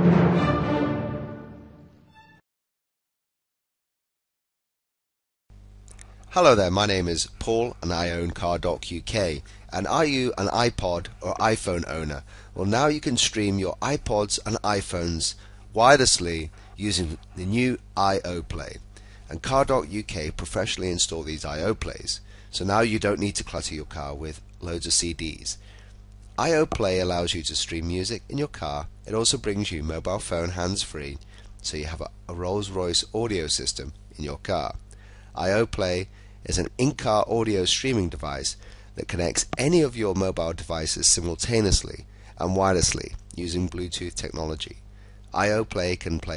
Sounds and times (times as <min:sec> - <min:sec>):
Speech: 0:06.3 - 0:25.6, 0:26.4 - 0:34.8, 0:35.4 - 0:46.3.